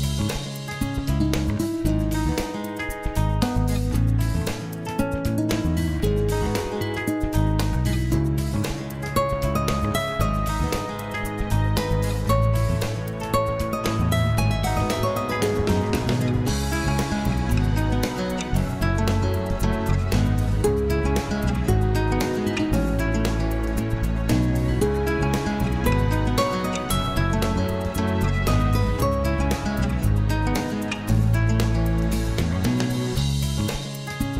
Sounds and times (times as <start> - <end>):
Music: 0.0 - 34.3.